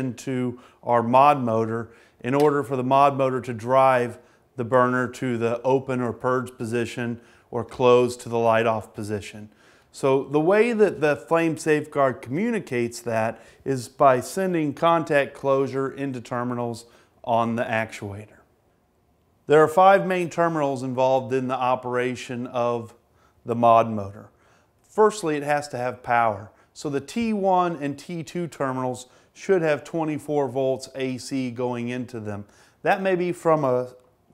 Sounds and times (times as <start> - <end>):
Speech: 0.0 - 18.5, 19.5 - 24.3, 24.9 - 34.0.